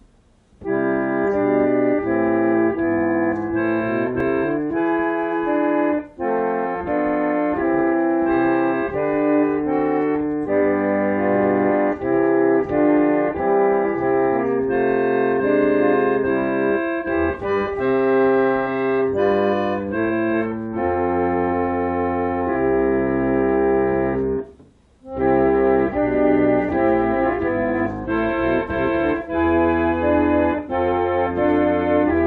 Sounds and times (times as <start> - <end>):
Piano: 0.0 - 32.2.